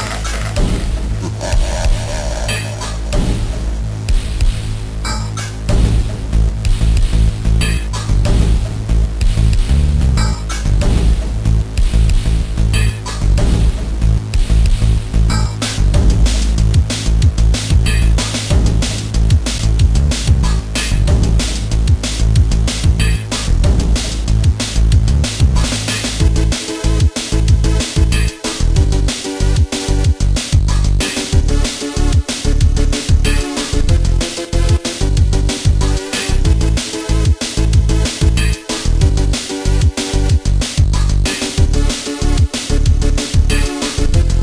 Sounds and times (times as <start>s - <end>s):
Soundtrack music: 0.0s - 44.4s.